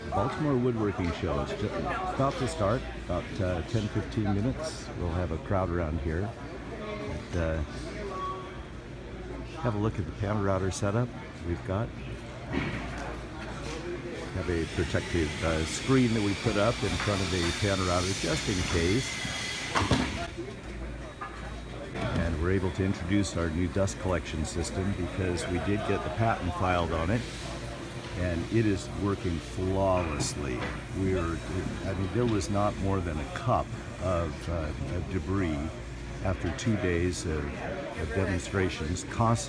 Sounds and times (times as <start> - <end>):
Speech: 0.0 - 8.4, 9.0 - 12.2, 13.0 - 19.3, 20.2 - 39.4.